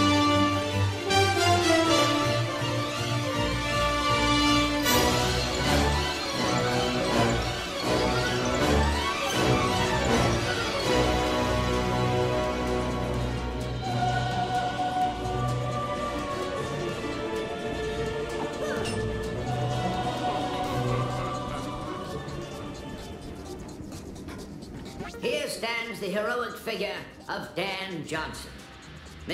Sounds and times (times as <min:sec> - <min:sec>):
Music: 0:00.0 - 0:29.3.